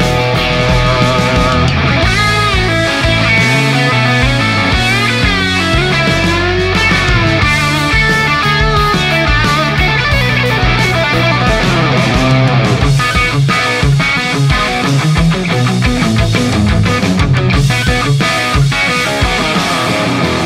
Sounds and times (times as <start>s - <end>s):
Guitar: 0.0s - 20.4s
Heavy metal: 0.0s - 20.4s.